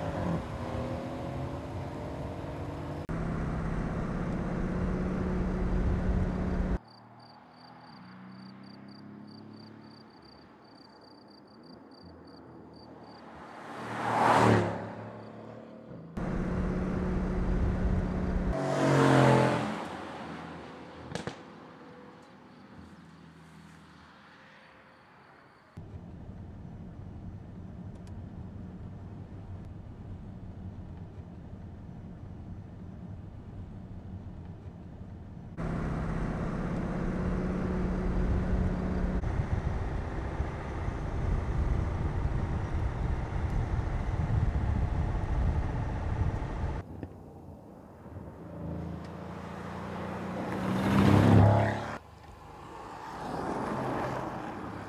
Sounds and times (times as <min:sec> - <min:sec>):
Car: 0:00.0 - 0:54.8
Outside, urban or manmade: 0:00.0 - 0:54.8.